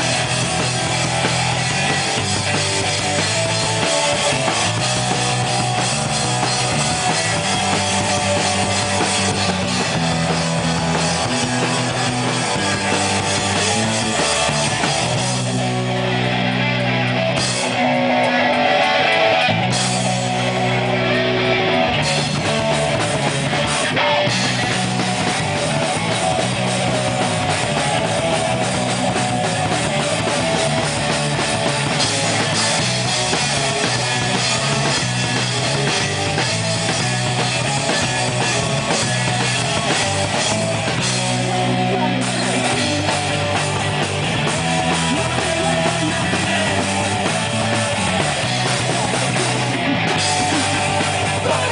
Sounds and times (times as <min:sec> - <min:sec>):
Music: 0:00.0 - 0:51.7.